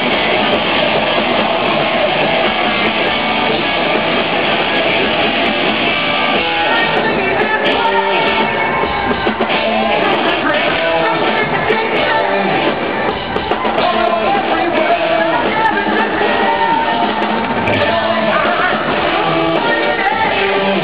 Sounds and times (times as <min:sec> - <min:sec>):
Heavy metal: 0:00.0 - 0:20.8
Progressive rock: 0:00.0 - 0:20.8
Shout: 0:06.6 - 0:11.2.